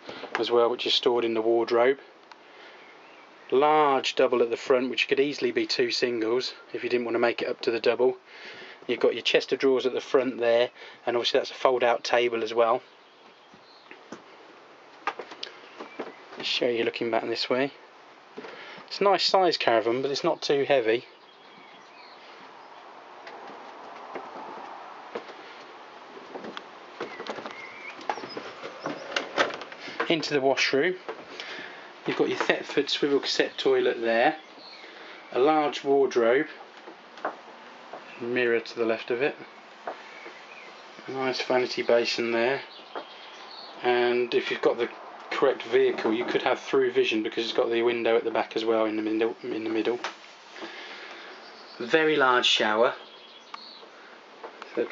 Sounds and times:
Speech: 0.4s - 2.1s, 3.5s - 8.2s, 8.9s - 12.9s, 16.4s - 17.8s, 18.9s - 21.1s, 30.0s - 31.0s, 32.1s - 34.4s, 35.3s - 36.6s, 38.2s - 39.5s, 41.0s - 42.7s, 43.8s - 50.1s, 51.8s - 53.0s, 54.7s - 54.9s.

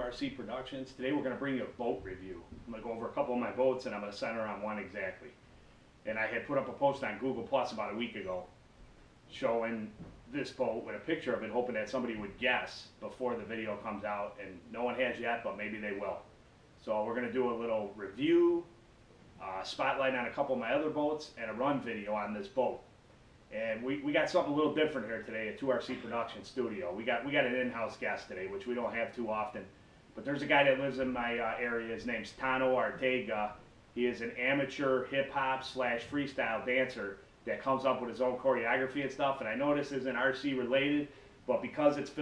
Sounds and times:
Speech: 0.0s - 5.4s, 6.1s - 8.6s, 9.3s - 18.7s, 19.4s - 22.9s, 23.5s - 42.2s.

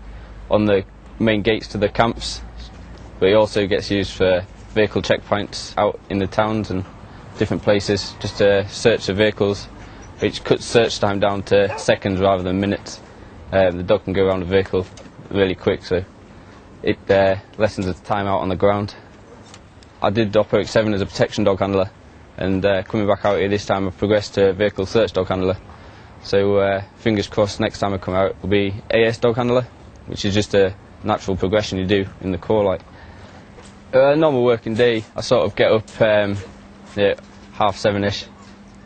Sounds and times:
Speech: 0.5s - 16.1s, 16.8s - 19.1s, 20.0s - 25.6s, 26.2s - 32.9s, 33.9s - 38.4s
Bow-wow: 11.6s - 12.0s.

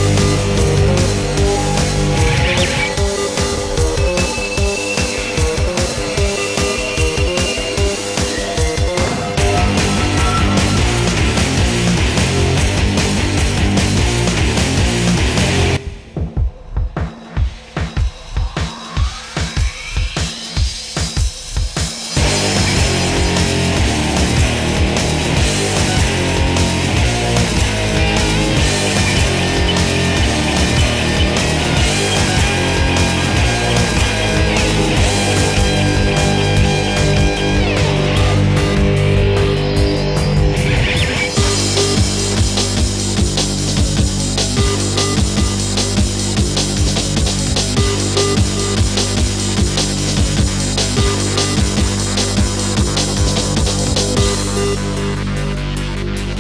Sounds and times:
Music: 0.0s - 56.4s.

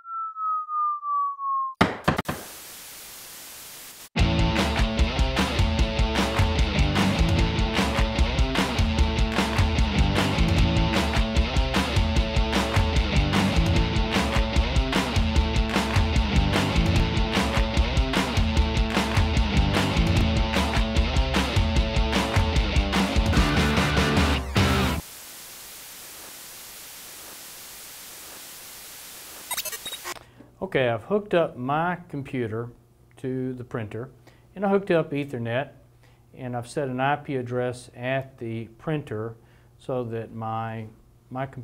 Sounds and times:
Speech: 30.6s - 35.8s, 36.4s - 41.6s.

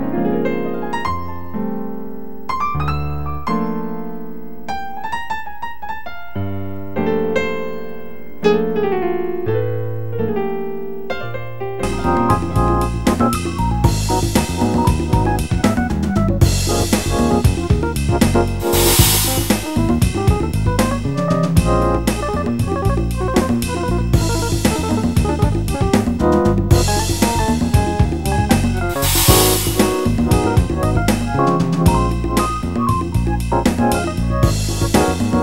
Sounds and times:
Electric piano: 0.0s - 35.4s
Synthesizer: 11.8s - 35.4s.

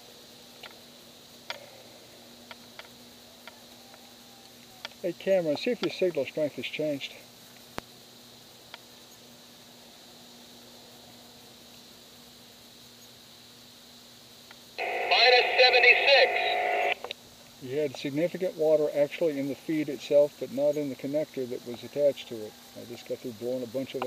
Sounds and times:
Outside, rural or natural: 0.0s - 24.0s
Speech: 5.0s - 7.2s, 14.8s - 16.7s, 17.6s - 24.0s.

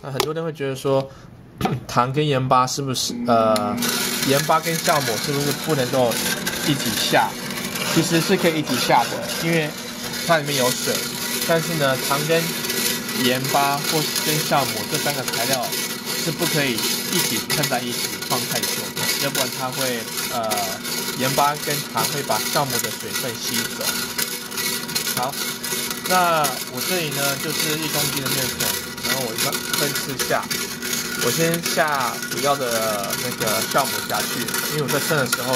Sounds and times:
Blender: 3.1s - 35.5s.

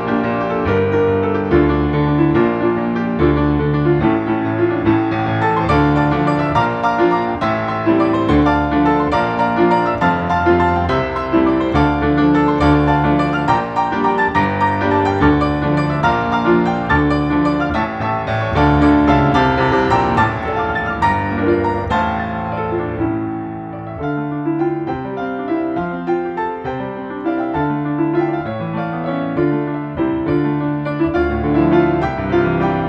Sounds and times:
Music: 0.0s - 32.8s.

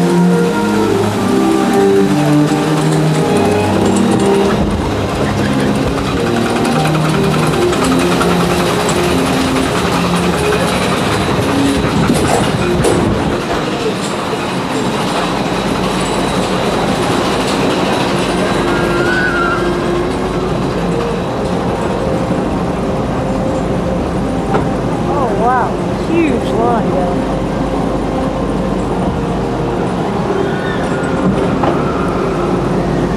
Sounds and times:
Music: 0.0s - 33.1s
Outside, urban or manmade: 0.0s - 33.1s.

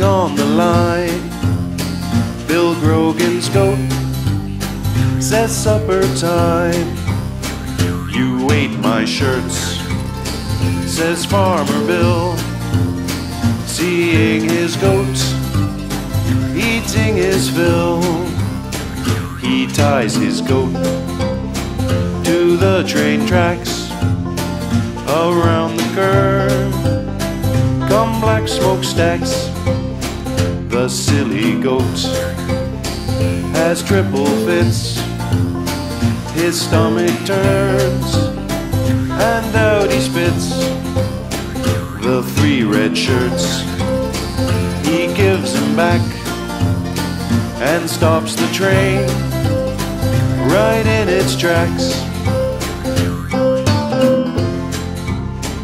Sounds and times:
Music: 0.0s - 55.6s.

